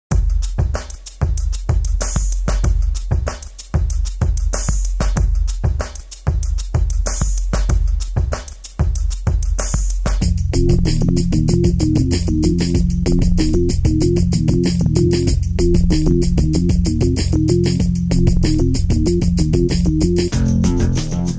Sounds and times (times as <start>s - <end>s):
Drum machine: 0.1s - 21.3s.